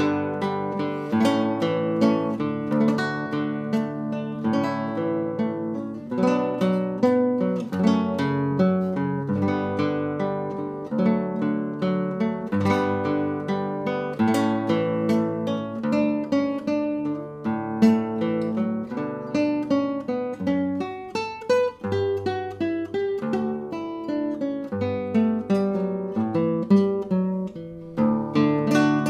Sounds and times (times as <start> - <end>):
Acoustic guitar: 0.0 - 29.0
Strum: 0.0 - 29.0.